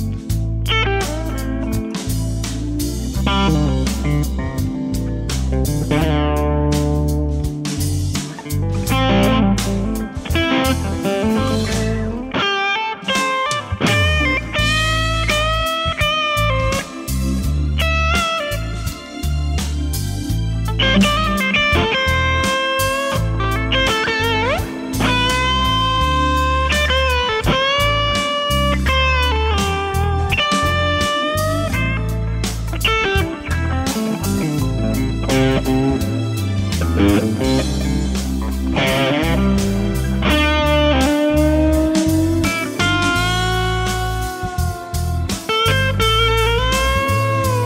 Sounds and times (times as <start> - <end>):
Electric guitar: 0.0 - 47.6.